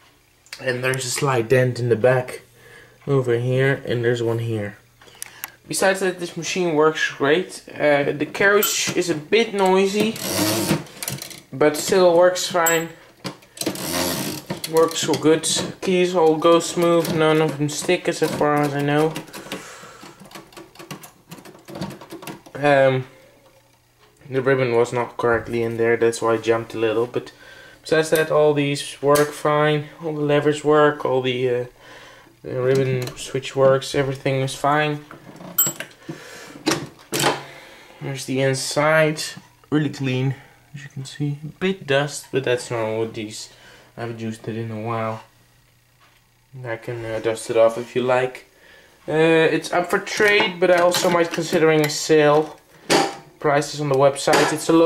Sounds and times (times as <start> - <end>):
Speech: 0.6 - 4.8, 5.7 - 10.2, 11.5 - 13.0, 14.7 - 19.2, 22.6 - 23.1, 24.2 - 31.7, 32.4 - 35.1, 38.0 - 45.3, 46.5 - 48.5, 49.1 - 52.6, 53.4 - 54.8.